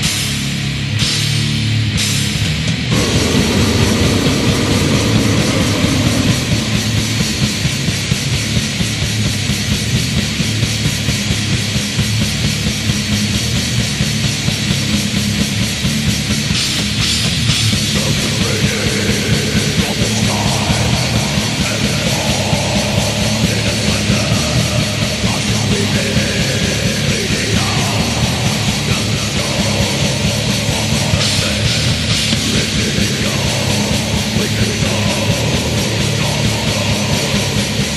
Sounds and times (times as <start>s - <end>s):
Music: 0.0s - 37.9s.